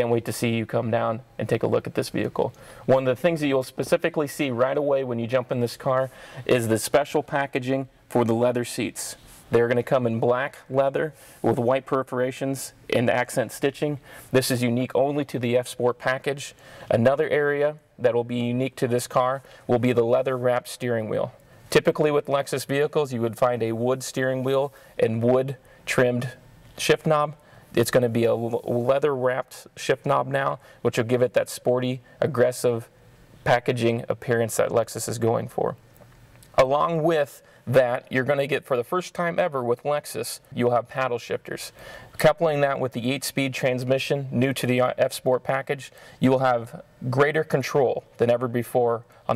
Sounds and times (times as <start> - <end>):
Speech: 0.0 - 35.8, 36.5 - 49.3.